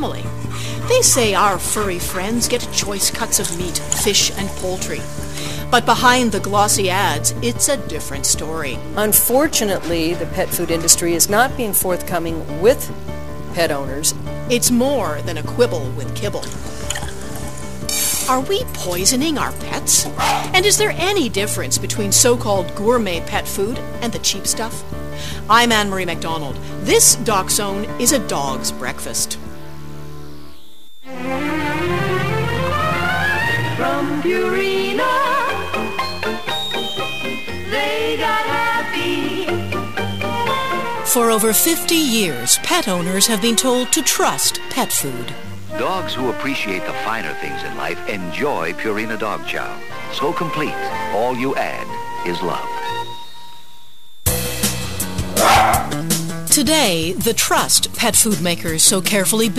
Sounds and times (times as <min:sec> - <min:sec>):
Music: 0:00.0 - 0:59.5
Speech: 0:00.9 - 0:05.0, 0:05.7 - 0:12.9, 0:13.6 - 0:16.5, 0:18.3 - 0:24.8, 0:25.5 - 0:29.4, 0:41.1 - 0:53.0, 0:56.5 - 0:59.5.